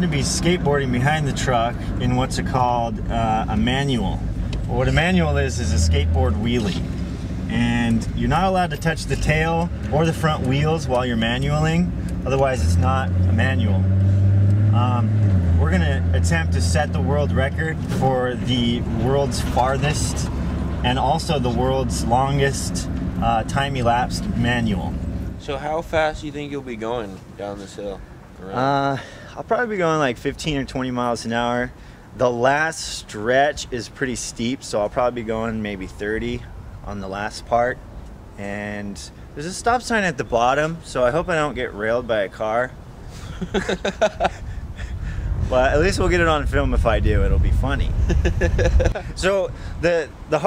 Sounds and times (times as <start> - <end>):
Speech: 0.0 - 6.8, 7.5 - 13.8, 14.8 - 37.8, 38.4 - 42.8, 45.5 - 48.0, 49.2 - 50.4.